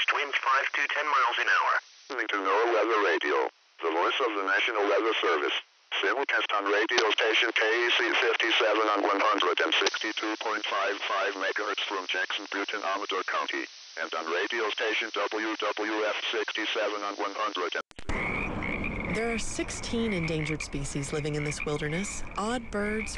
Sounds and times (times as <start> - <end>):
Speech: 0.0 - 17.8, 19.1 - 23.1
Radio: 0.0 - 18.3, 19.1 - 23.1.